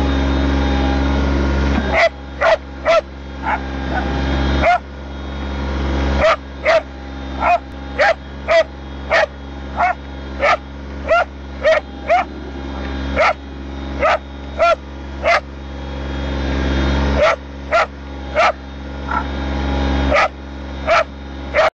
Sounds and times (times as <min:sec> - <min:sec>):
Bow-wow: 0:01.9 - 0:03.6, 0:04.6 - 0:04.8, 0:06.2 - 0:12.3, 0:13.2 - 0:13.4, 0:14.0 - 0:15.4, 0:17.2 - 0:19.2, 0:20.1 - 0:20.3, 0:20.9 - 0:21.7
Whimper (dog): 0:14.0 - 0:15.4.